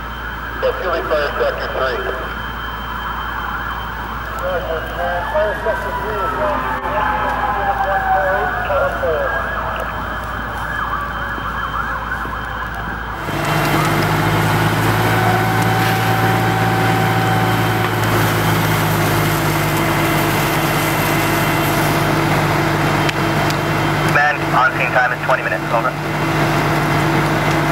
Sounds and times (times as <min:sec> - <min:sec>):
Fire: 0:00.0 - 0:27.7
Fire engine, fire truck (siren): 0:00.0 - 0:27.7
Outside, urban or manmade: 0:00.0 - 0:27.7
Speech: 0:00.6 - 0:02.3, 0:04.4 - 0:09.6, 0:24.1 - 0:26.0.